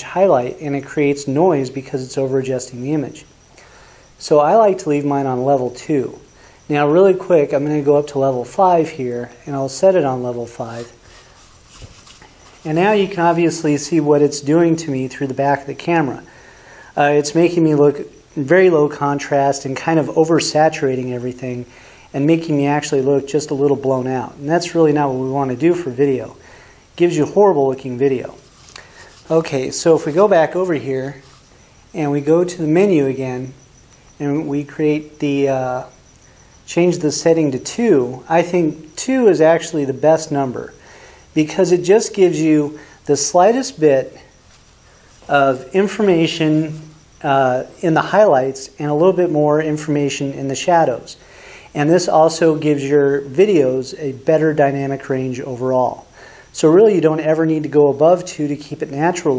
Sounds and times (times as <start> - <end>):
Speech: 0.0 - 3.3, 4.2 - 11.0, 12.6 - 16.3, 17.0 - 26.4, 27.0 - 28.4, 29.2 - 31.2, 31.9 - 33.6, 34.2 - 35.9, 36.7 - 40.8, 41.4 - 44.3, 45.3 - 59.3
Inside, small room: 0.0 - 59.3.